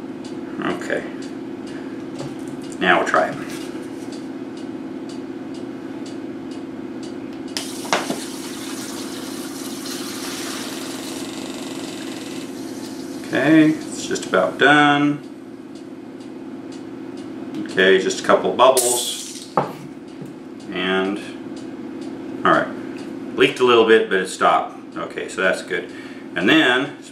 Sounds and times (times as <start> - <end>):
Male speech, man speaking: 0.6 - 1.2, 2.8 - 3.5, 13.3 - 15.2, 17.6 - 19.2, 20.7 - 21.4, 22.4 - 22.8, 23.4 - 27.1.